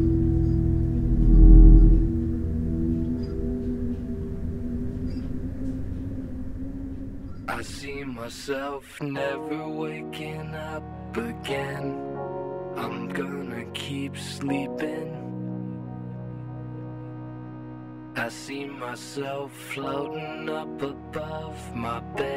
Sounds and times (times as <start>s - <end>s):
Music: 0.0s - 22.3s.